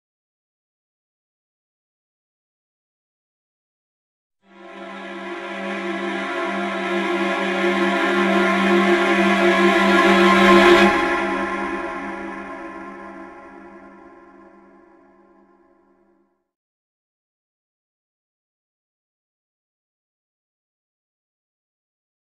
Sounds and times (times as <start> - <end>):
Music: 4.4 - 16.5.